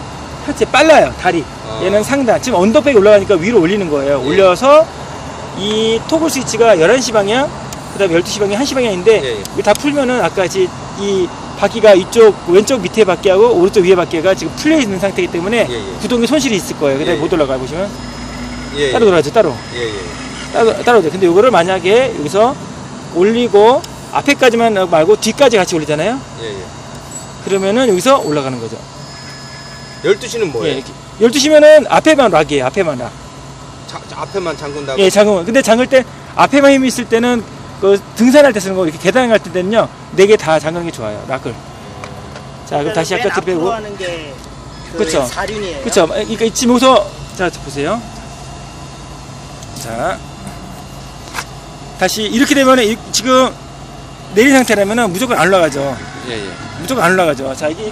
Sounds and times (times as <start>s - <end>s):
Speech: 0.4s - 4.9s, 23.2s - 26.7s, 30.1s - 33.2s, 33.9s - 41.6s, 42.7s - 48.0s, 52.0s - 53.6s, 54.3s - 57.9s.